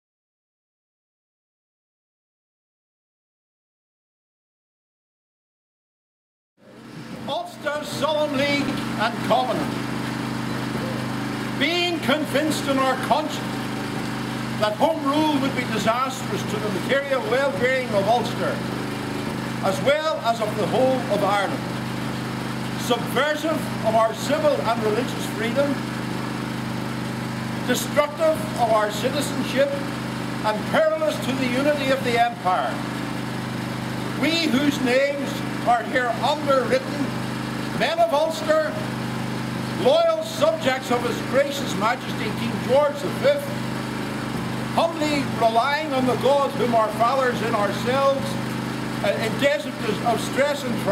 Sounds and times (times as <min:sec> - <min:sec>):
Narration, monologue: 0:06.7 - 0:50.9
Male speech, man speaking: 0:07.2 - 0:09.7, 0:11.6 - 0:13.4, 0:14.6 - 0:18.6, 0:19.6 - 0:21.6, 0:22.8 - 0:25.8, 0:27.7 - 0:29.8, 0:30.5 - 0:32.8, 0:34.2 - 0:37.1, 0:37.8 - 0:38.8, 0:39.8 - 0:43.6, 0:44.8 - 0:48.4, 0:49.0 - 0:50.9.